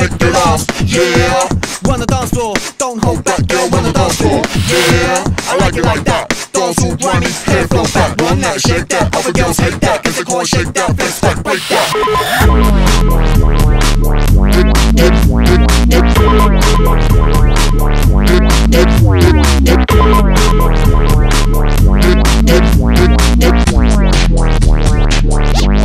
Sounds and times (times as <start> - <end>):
Sampler: 11.6 - 24.4.